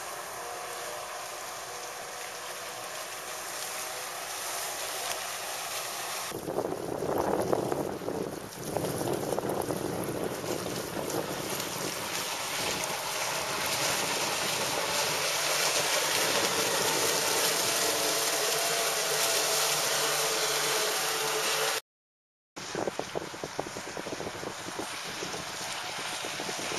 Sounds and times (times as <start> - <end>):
Motorboat, speedboat: 0.0 - 21.8, 22.6 - 26.7
Wind noise (microphone): 6.4 - 15.2, 22.6 - 26.7.